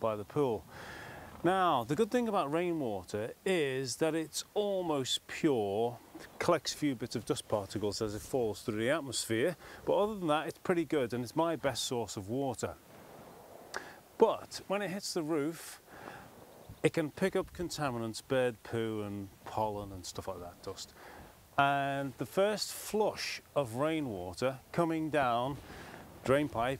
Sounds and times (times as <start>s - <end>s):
Speech: 0.0s - 0.6s, 1.4s - 12.8s, 14.2s - 15.8s, 16.8s - 21.0s, 21.6s - 25.6s, 26.2s - 26.7s.